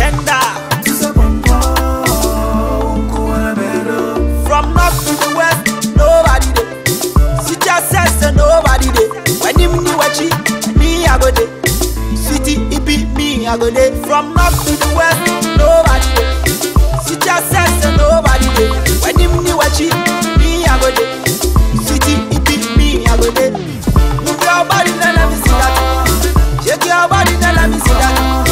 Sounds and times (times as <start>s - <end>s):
Music of Africa: 0.0s - 28.5s.